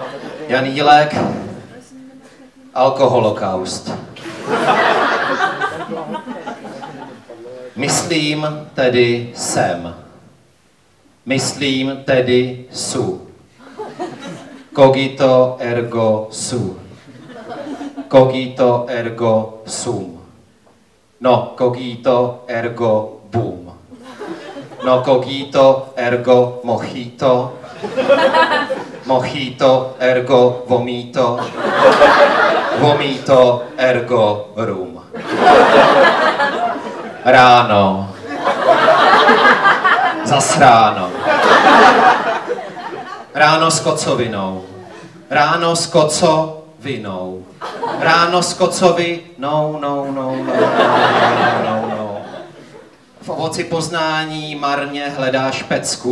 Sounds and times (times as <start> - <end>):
Speech: 0.0 - 4.1, 5.4 - 10.1, 11.3 - 13.4, 14.8 - 16.9, 18.1 - 20.4, 21.2 - 23.8, 24.8 - 27.6, 29.0 - 31.5, 32.7 - 35.2, 37.2 - 38.2, 40.2 - 41.3, 43.4 - 52.4, 53.2 - 56.1.